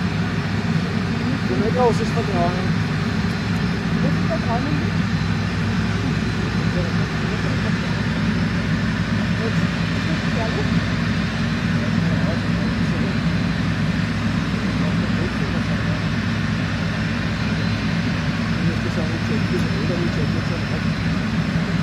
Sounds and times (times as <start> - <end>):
Truck: 0.0 - 21.8
Speech: 0.7 - 2.7, 6.0 - 8.3, 9.2 - 10.9, 11.6 - 13.4, 14.5 - 16.1, 18.6 - 21.0.